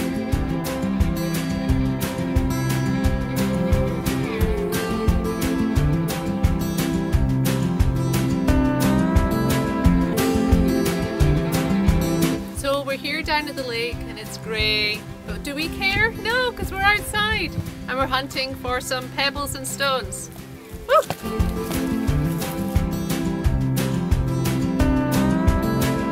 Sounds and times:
Music: 0.0s - 26.1s
Speech: 12.6s - 20.3s.

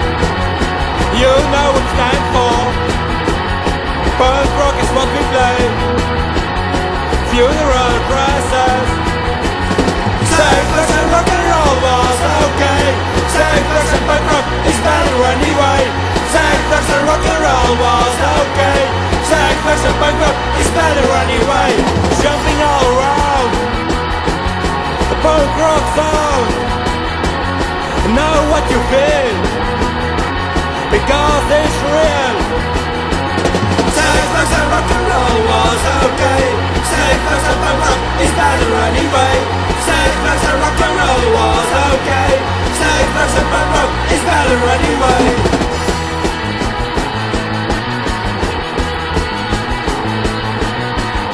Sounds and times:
Rock and roll: 0.0s - 51.3s.

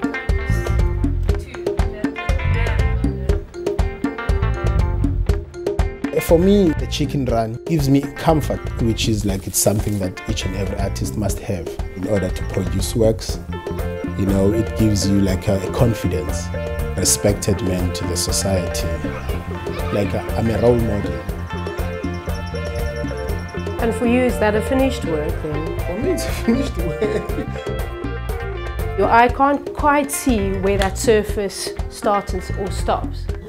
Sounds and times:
Music: 0.0s - 33.4s
Speech: 6.2s - 13.4s, 19.9s - 21.2s.

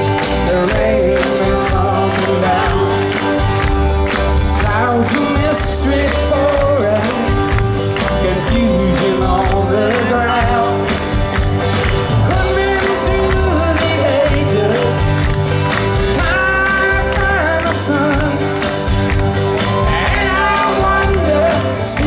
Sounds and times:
Music: 0.0s - 22.0s.

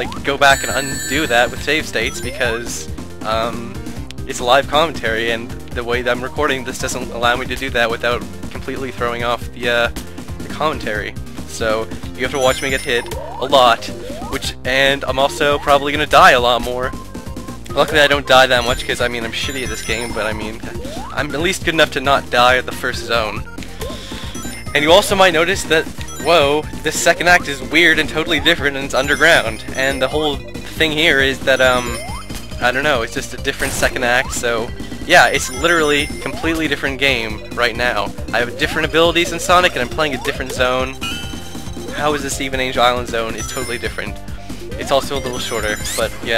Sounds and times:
Speech: 0.0s - 16.9s, 17.7s - 23.4s, 24.7s - 32.0s, 32.6s - 41.0s, 41.9s - 44.1s, 44.8s - 46.3s.

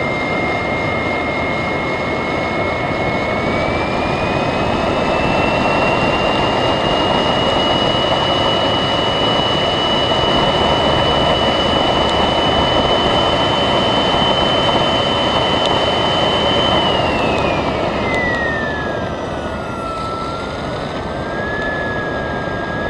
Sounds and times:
Engine: 0.0s - 22.9s.

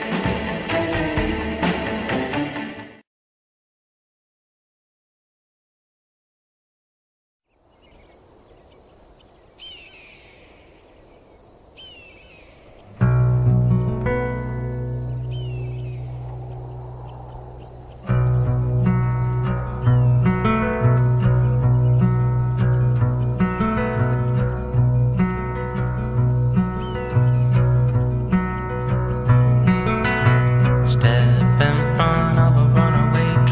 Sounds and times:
Music: 0.0s - 3.0s, 12.9s - 16.5s, 18.0s - 33.5s.

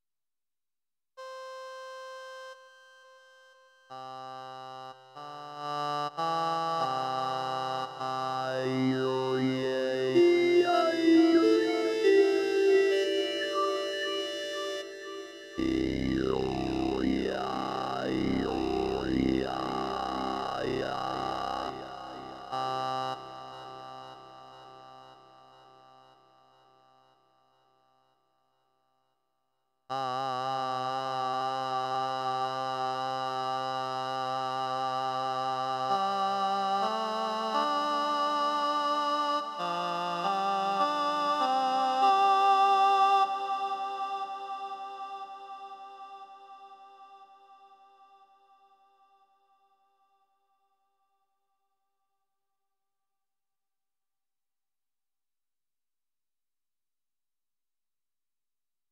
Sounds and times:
Synthesizer: 1.2s - 26.0s, 34.8s - 48.0s.

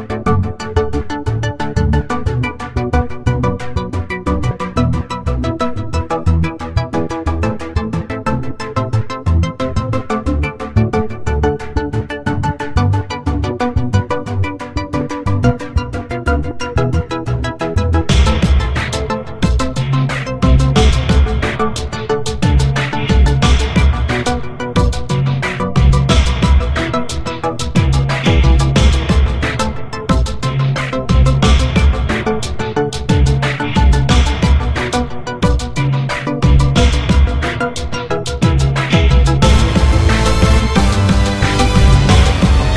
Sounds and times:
Music: 0.0s - 42.7s.

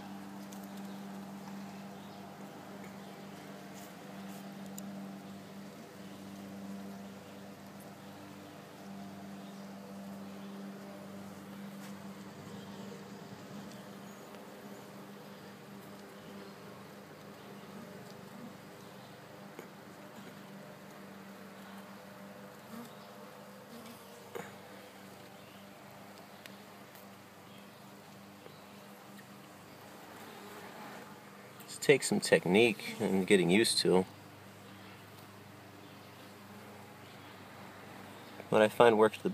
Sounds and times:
Bee, wasp, etc.: 0.0s - 39.3s.

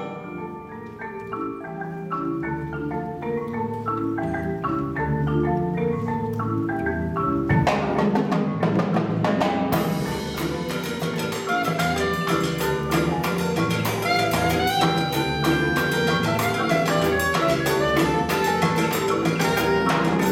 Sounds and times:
Cowbell: 9.8s - 20.3s.

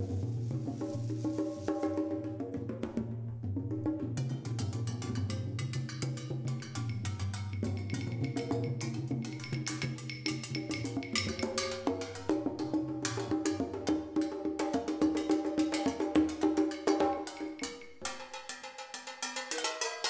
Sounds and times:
Percussion: 0.0s - 20.1s.

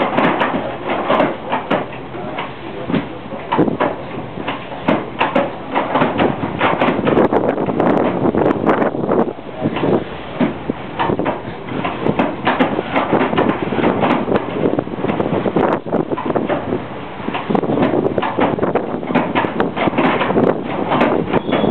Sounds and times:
Wind noise (microphone): 2.8s - 21.7s.

